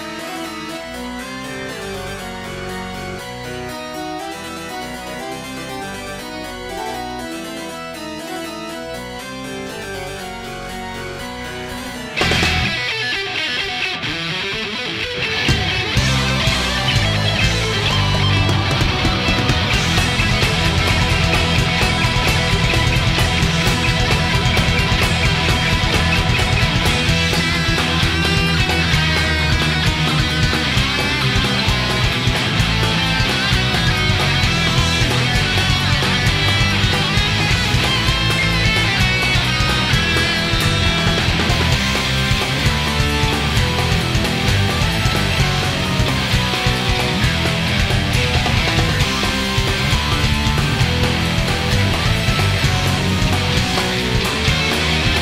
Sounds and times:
Music: 0.0 - 55.2.

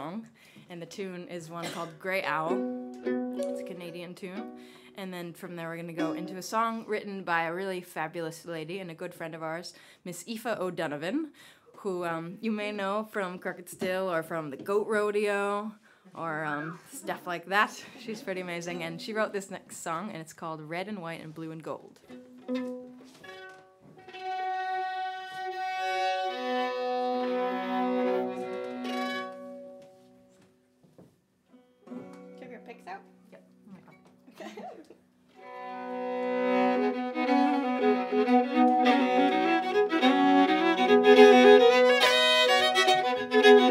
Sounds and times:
Speech: 0.0 - 2.6, 5.0 - 21.9, 32.4 - 33.9
Music: 1.9 - 7.4, 22.0 - 30.7, 31.5 - 43.7.

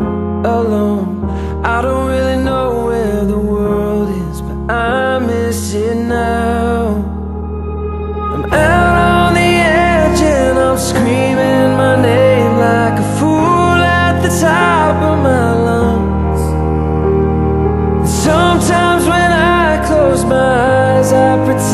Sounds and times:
Music: 0.0 - 21.7.

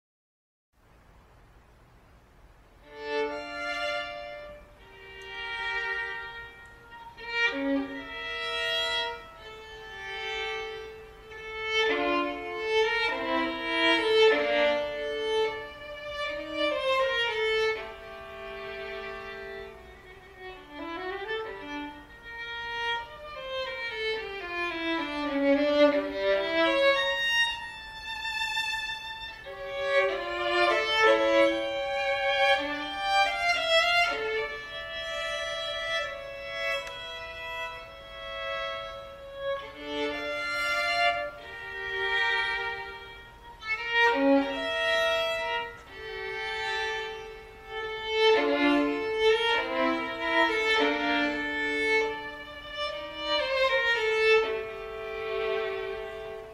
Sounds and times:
Violin, fiddle: 2.8 - 56.5.

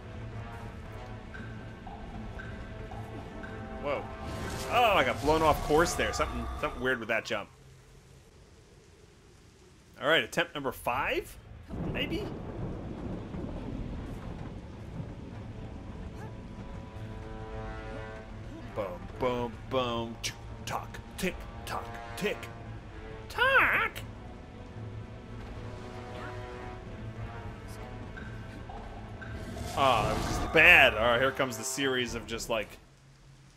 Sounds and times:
Music: 0.0 - 8.8, 14.4 - 33.5
Speech: 10.0 - 12.3, 29.8 - 32.8.

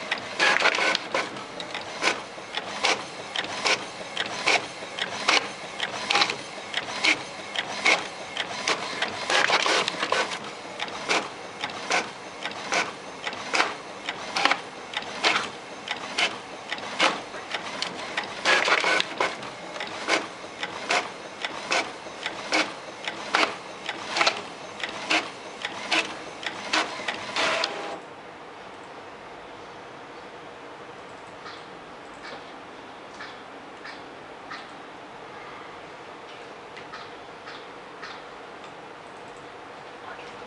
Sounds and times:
Printer: 0.0 - 28.2.

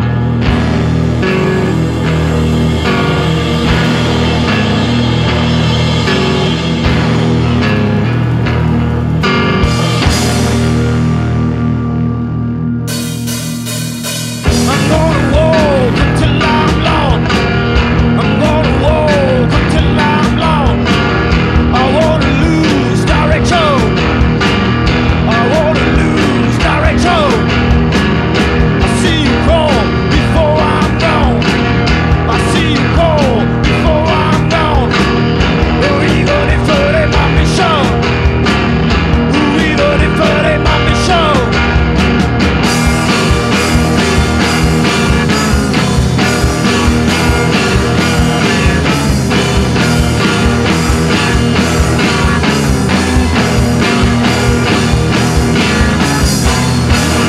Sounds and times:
Psychedelic rock: 0.0 - 57.2.

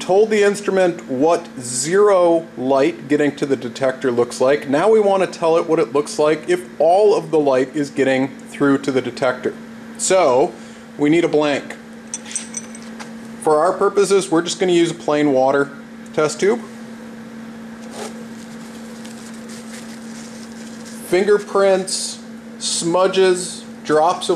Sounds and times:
Speech: 0.0 - 11.8, 13.4 - 16.7, 21.0 - 24.3.

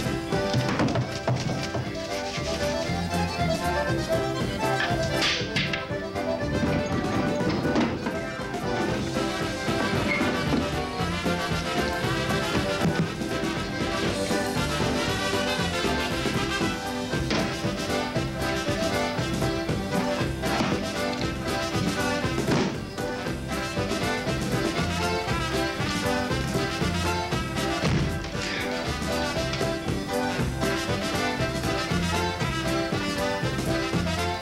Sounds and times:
Music: 0.0 - 34.4.

